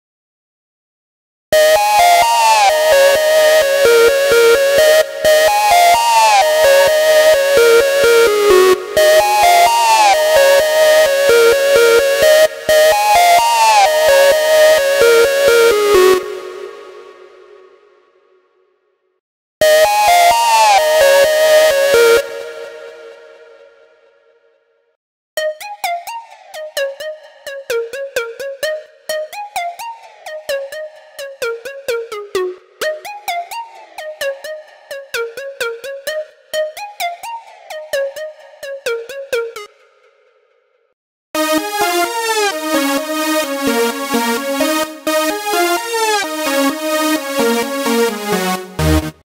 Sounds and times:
Music: 0:01.5 - 0:49.2.

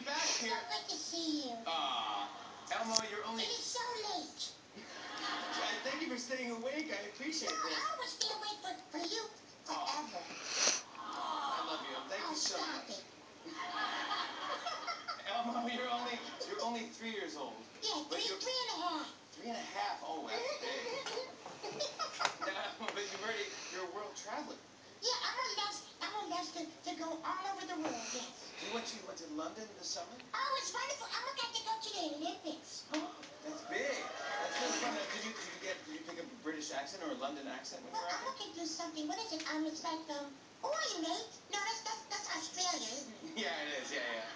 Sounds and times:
Inside, small room: 0:00.0 - 0:44.3.

